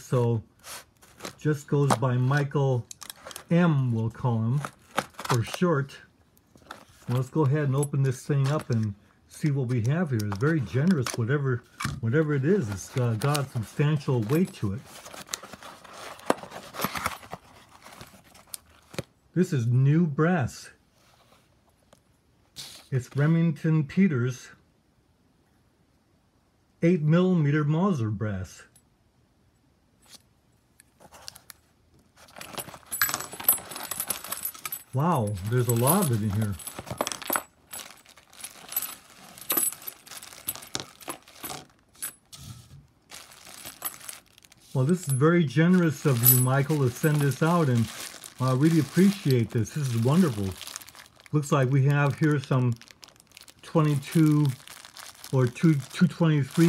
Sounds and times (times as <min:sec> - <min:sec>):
Speech: 0:00.0 - 0:00.5, 0:01.4 - 0:02.9, 0:03.5 - 0:04.7, 0:05.3 - 0:06.1, 0:07.1 - 0:14.9, 0:19.4 - 0:20.8, 0:22.9 - 0:24.6, 0:26.8 - 0:28.8, 0:35.0 - 0:36.6, 0:44.8 - 0:50.6, 0:51.3 - 0:52.8, 0:53.6 - 0:54.6, 0:55.3 - 0:56.6
Inside, small room: 0:00.0 - 0:56.6
Crumpling, crinkling: 0:00.6 - 0:03.6, 0:04.5 - 0:05.7, 0:06.5 - 0:07.6, 0:10.2 - 0:11.8, 0:12.5 - 0:19.1, 0:30.9 - 0:42.2, 0:43.0 - 0:56.6.